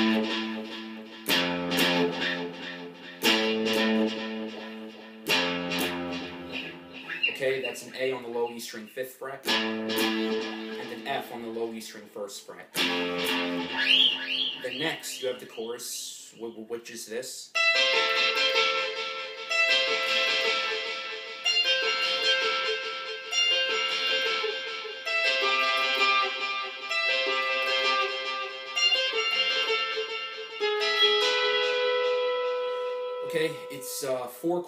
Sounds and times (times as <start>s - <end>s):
Guitar: 0.0s - 15.8s, 17.6s - 34.6s.